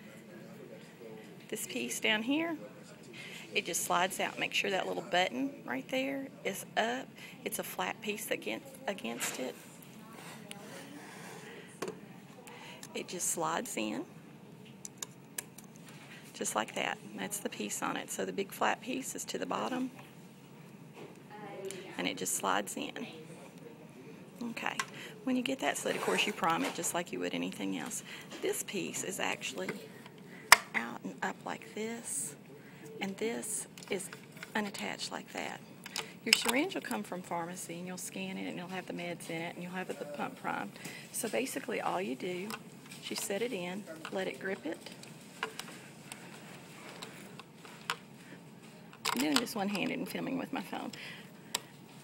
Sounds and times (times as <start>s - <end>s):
Speech: 0.0s - 11.5s, 21.4s - 30.0s, 36.2s - 44.9s, 49.1s - 51.0s.